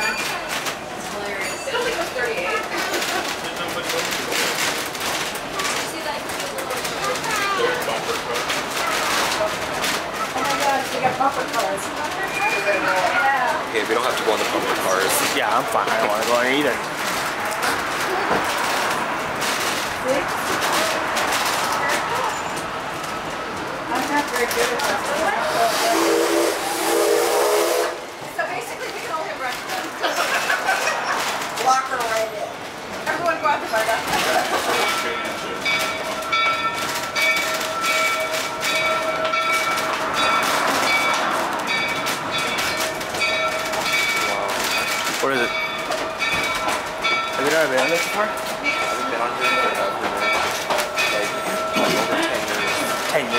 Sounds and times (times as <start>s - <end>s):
Steam whistle: 25.6s - 28.1s.